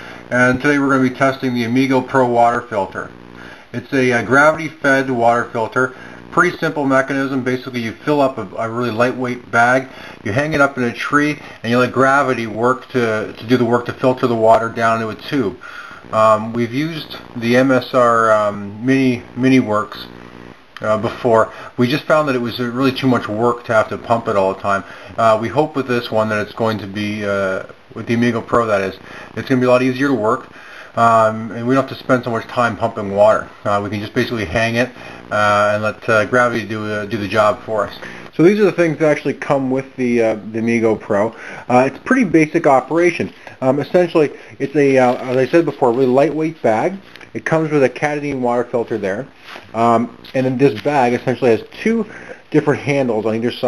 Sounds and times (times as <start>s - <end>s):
Speech: 0.0s - 20.2s, 20.8s - 53.6s.